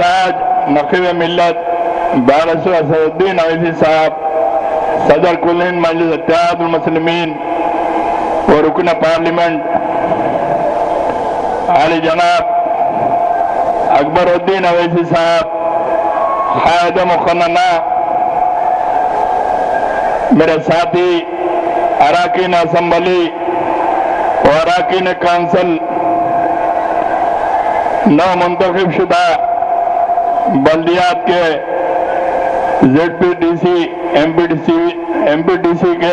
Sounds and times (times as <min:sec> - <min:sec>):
Male speech, man speaking: 0:00.0 - 0:01.6, 0:02.2 - 0:04.2, 0:05.0 - 0:07.4, 0:08.5 - 0:09.7, 0:11.7 - 0:12.5, 0:13.9 - 0:15.5, 0:16.6 - 0:17.9, 0:20.3 - 0:21.3, 0:22.0 - 0:23.4, 0:24.4 - 0:25.8, 0:28.1 - 0:29.4, 0:30.5 - 0:31.6, 0:32.8 - 0:36.1.